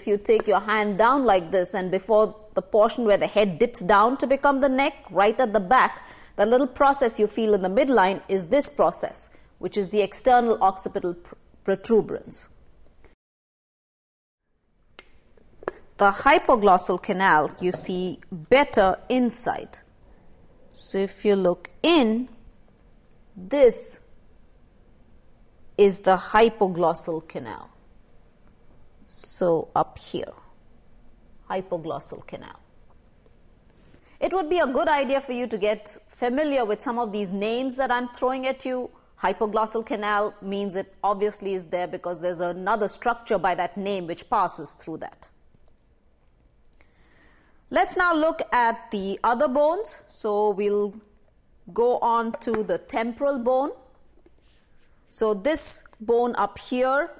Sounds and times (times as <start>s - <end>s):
Speech: 0.0s - 12.5s, 16.0s - 19.8s, 20.8s - 22.4s, 23.4s - 24.0s, 25.8s - 27.8s, 29.1s - 30.5s, 31.5s - 32.6s, 34.2s - 45.4s, 47.7s - 51.0s, 51.7s - 53.9s, 55.2s - 57.1s
Inside, small room: 14.4s - 57.1s.